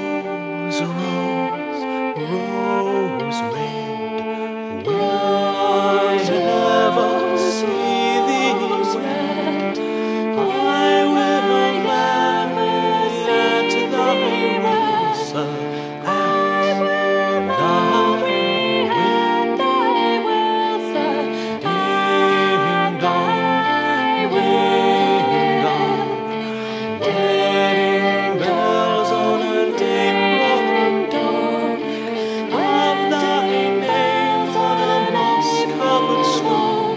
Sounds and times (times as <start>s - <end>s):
Music: 0.0s - 36.9s.